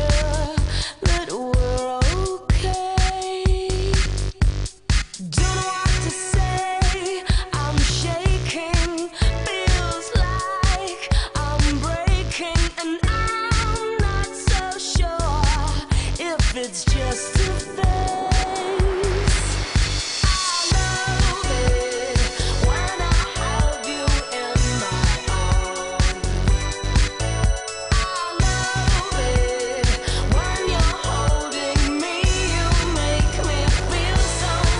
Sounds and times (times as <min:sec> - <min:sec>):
Music: 0:00.0 - 0:34.7.